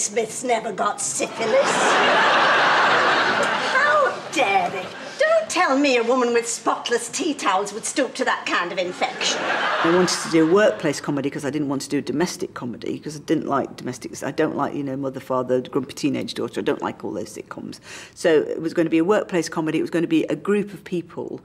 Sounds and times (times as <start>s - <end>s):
Speech: 0.0s - 2.0s, 3.7s - 21.4s.